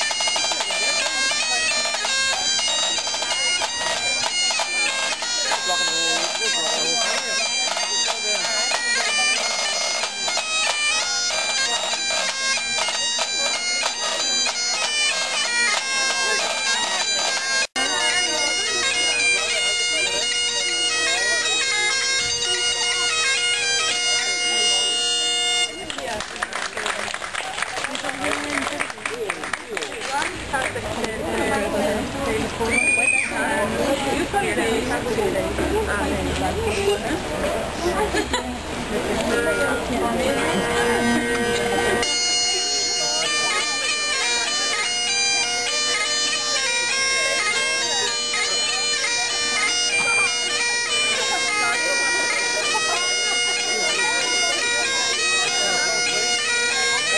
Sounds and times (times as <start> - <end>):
Speech: 0.0 - 57.1
Traditional music: 0.0 - 57.1.